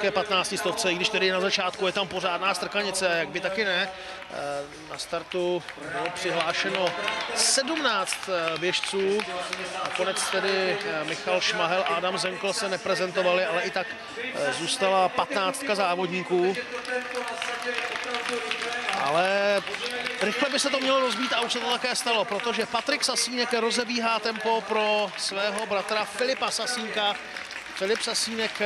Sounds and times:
Speech: 0:00.0 - 0:27.2, 0:27.8 - 0:28.6.

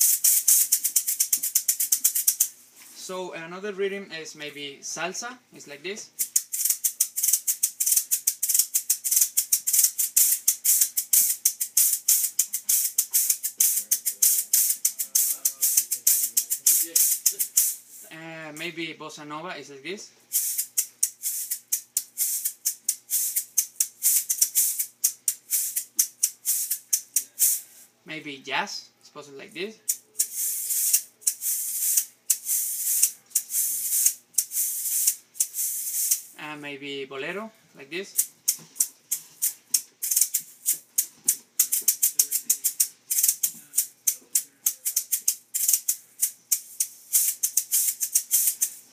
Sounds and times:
Maraca: 0:00.0 - 0:02.9, 0:06.2 - 0:18.2, 0:20.3 - 0:27.8, 0:29.7 - 0:36.4, 0:38.0 - 0:48.9.

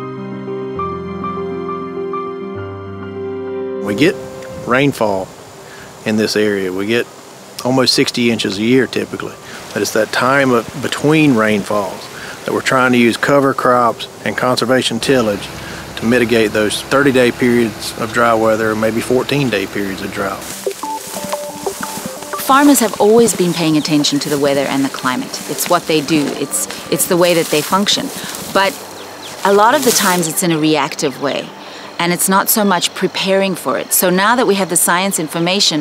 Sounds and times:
Music: 0:00.0 - 0:05.2, 0:14.9 - 0:32.1
Speech: 0:03.8 - 0:05.3, 0:06.0 - 0:20.5, 0:22.4 - 0:28.8, 0:29.4 - 0:35.8.

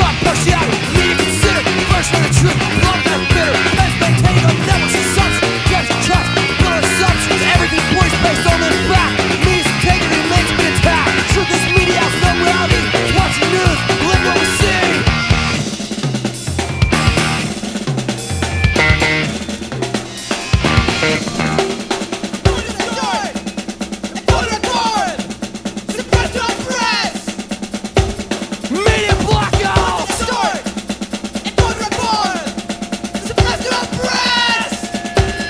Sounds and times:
Bass drum: 0:00.0 - 0:19.4, 0:20.6 - 0:21.8, 0:28.0 - 0:30.3
Drum kit: 0:00.0 - 0:35.4
Drum roll: 0:00.0 - 0:35.4.

